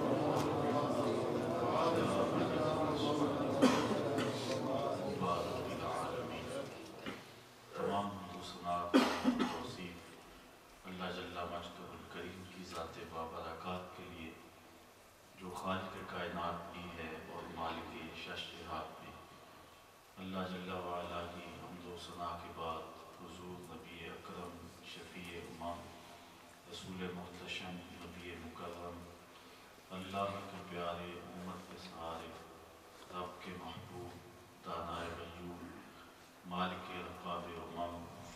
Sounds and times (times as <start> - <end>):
Narration, monologue: 0.0 - 38.3.